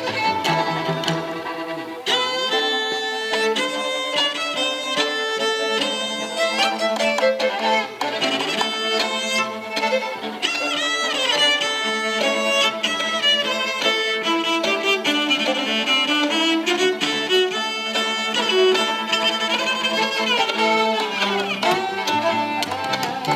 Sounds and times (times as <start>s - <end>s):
Cello: 0.0s - 23.3s
Violin, fiddle: 0.0s - 23.3s.